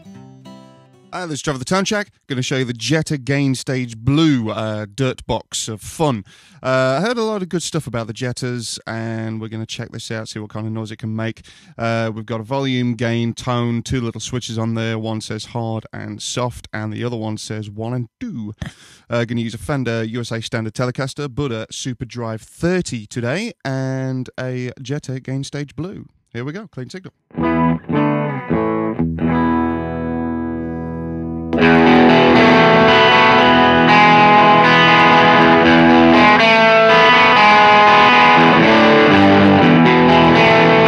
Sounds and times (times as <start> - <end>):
Speech: 1.2 - 27.1.